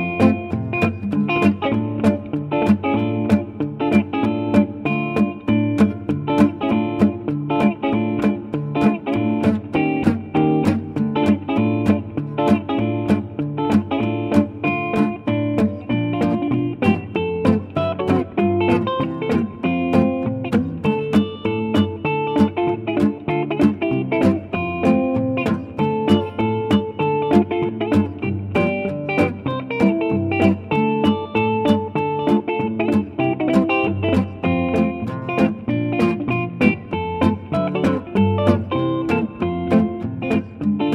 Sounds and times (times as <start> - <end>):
Music: 0.0 - 40.9.